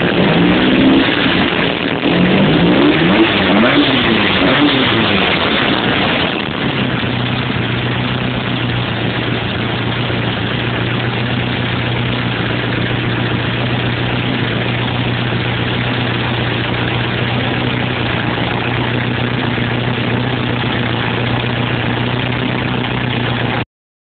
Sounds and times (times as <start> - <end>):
Engine: 0.0 - 23.7.